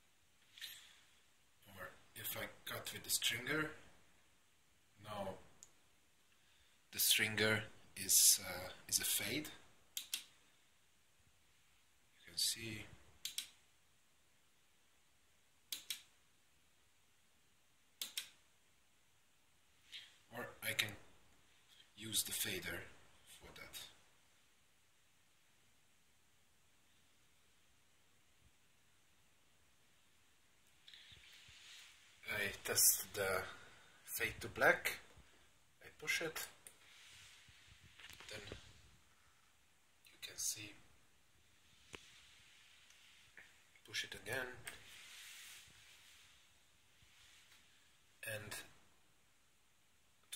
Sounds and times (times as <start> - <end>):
Inside, small room: 0.0 - 50.3
Speech: 1.6 - 3.9, 5.0 - 5.5, 6.9 - 9.7, 12.2 - 13.0, 20.3 - 21.1, 22.0 - 24.0, 32.2 - 35.2, 35.8 - 36.7, 38.2 - 38.6, 40.0 - 40.9, 43.8 - 44.9, 48.2 - 48.8.